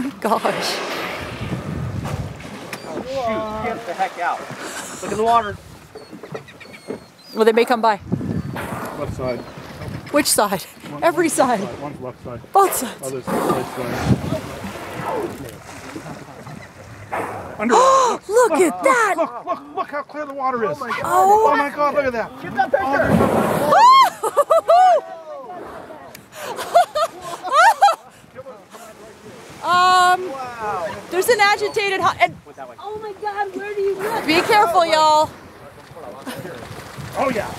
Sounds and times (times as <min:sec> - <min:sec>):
Ocean: 0:00.0 - 0:37.5.